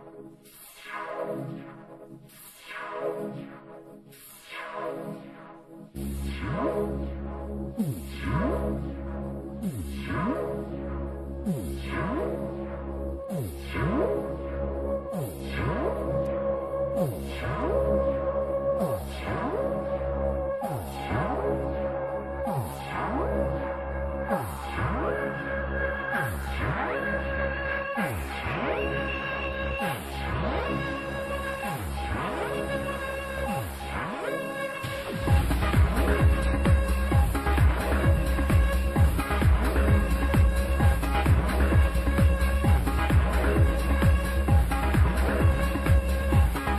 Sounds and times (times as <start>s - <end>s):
Music: 0.0s - 46.7s.